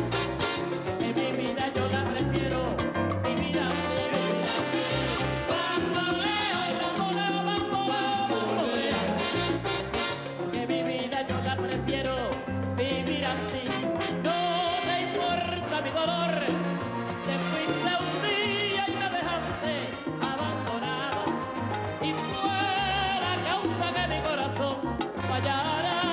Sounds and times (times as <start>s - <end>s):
Pop music: 0.0s - 26.1s.